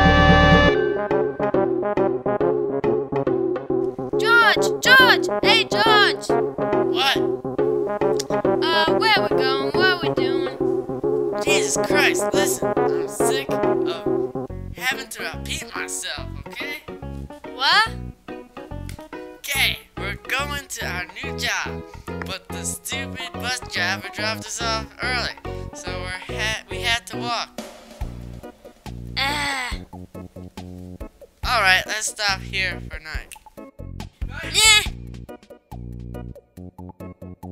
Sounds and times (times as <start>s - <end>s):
Music: 0.0s - 37.5s
Speech: 4.2s - 7.2s, 8.6s - 10.6s, 11.4s - 14.1s, 14.8s - 16.8s, 17.6s - 18.0s, 19.5s - 27.5s, 29.2s - 29.8s, 31.4s - 33.4s, 34.3s - 34.9s.